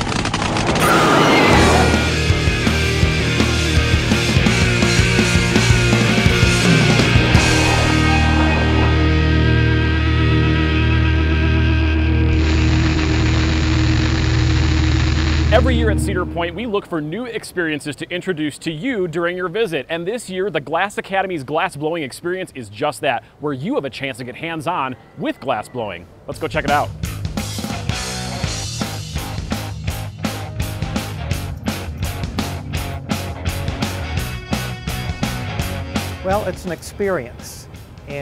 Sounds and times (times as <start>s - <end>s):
Music: 0.1s - 16.9s, 26.4s - 38.2s
Speech: 15.5s - 26.9s, 36.2s - 38.2s.